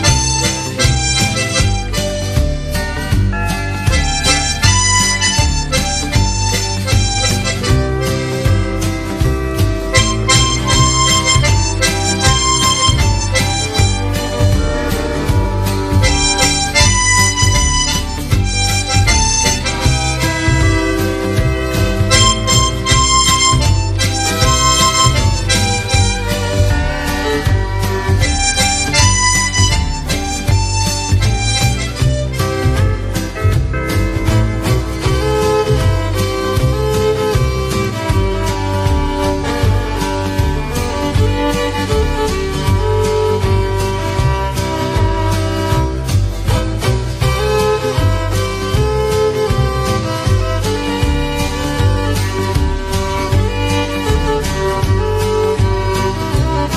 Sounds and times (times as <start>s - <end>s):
Harmonica: 0.0s - 56.7s
Wind instrument, woodwind instrument: 0.0s - 56.7s.